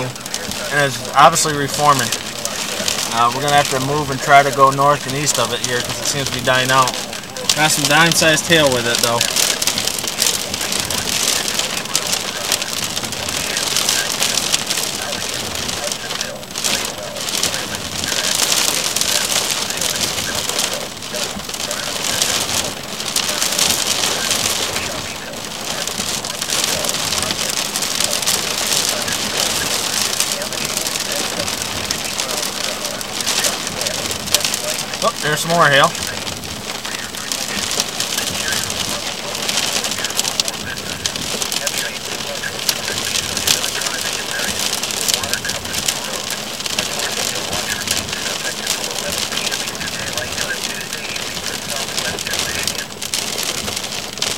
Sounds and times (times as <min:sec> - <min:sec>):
Rain on surface: 0:00.0 - 0:54.3.